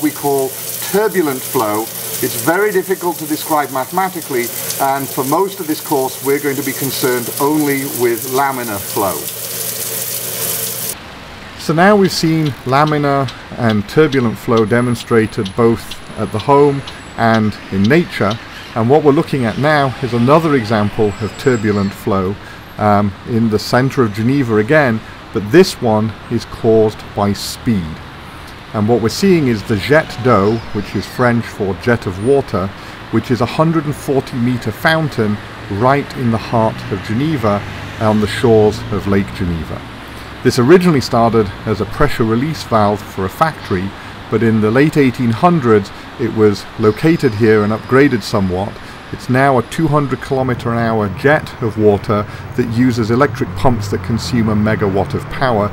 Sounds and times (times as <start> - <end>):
Speech: 0.0 - 9.3, 11.6 - 28.0, 28.7 - 55.7
Liquid: 0.0 - 11.0
Water: 0.0 - 55.7.